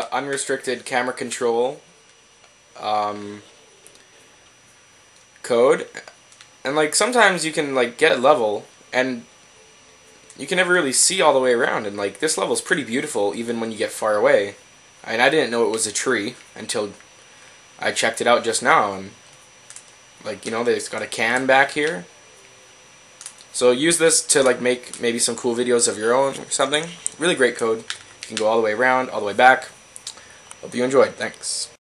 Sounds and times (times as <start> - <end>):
Speech: 0.0 - 1.8, 2.8 - 3.5, 5.4 - 6.1, 6.7 - 9.3, 10.4 - 17.0, 17.8 - 19.2, 20.2 - 22.1, 23.5 - 29.8, 30.6 - 31.8.